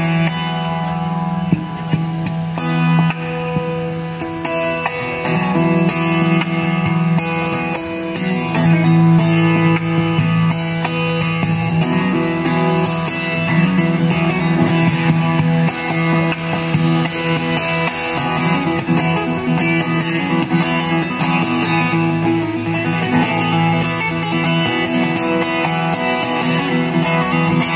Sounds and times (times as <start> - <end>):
Acoustic guitar: 0.0 - 27.7
Electric guitar: 0.0 - 27.7.